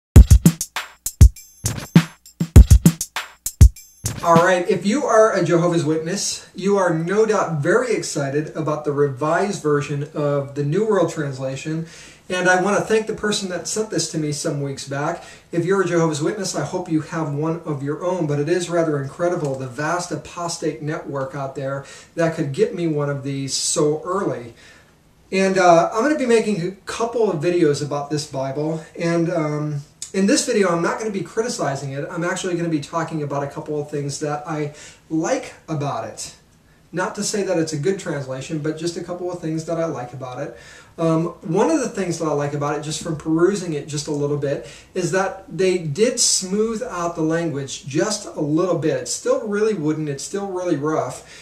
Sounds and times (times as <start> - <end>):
Drum machine: 0.1 - 4.5
Speech: 4.2 - 24.6, 25.3 - 51.3.